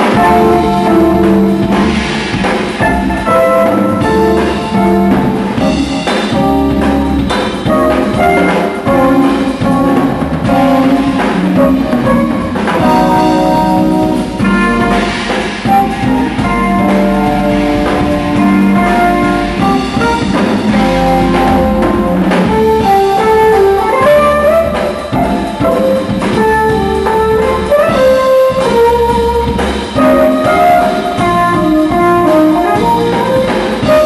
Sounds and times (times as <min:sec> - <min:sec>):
Music: 0:00.0 - 0:34.0.